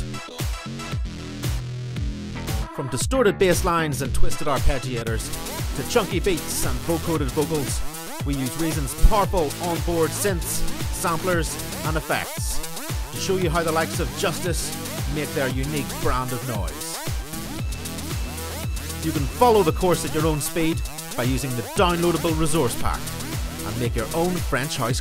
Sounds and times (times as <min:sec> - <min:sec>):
Music: 0:00.0 - 0:25.0
Speech: 0:02.8 - 0:12.6, 0:13.2 - 0:17.0, 0:19.0 - 0:23.0, 0:23.6 - 0:25.0.